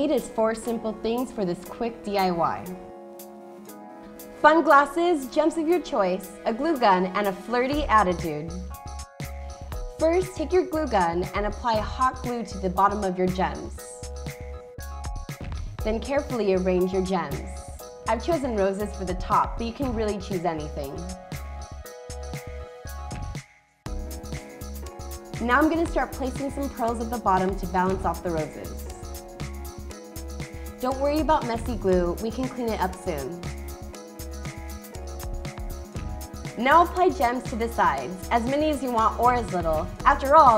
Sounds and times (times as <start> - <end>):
Speech: 0.0 - 2.8, 4.4 - 8.6, 10.0 - 14.0, 15.9 - 21.1, 25.4 - 28.8, 30.8 - 33.4, 36.6 - 40.5
Music: 0.0 - 40.5.